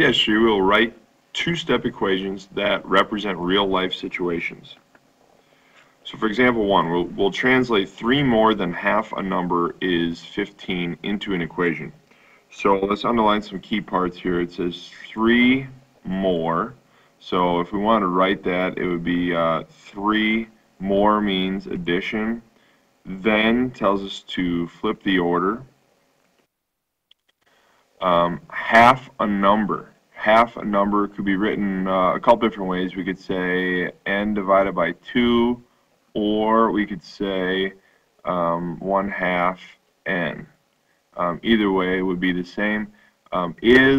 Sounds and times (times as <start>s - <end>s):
Speech: 0.0s - 4.8s, 6.0s - 25.7s, 28.0s - 40.6s, 41.2s - 43.9s.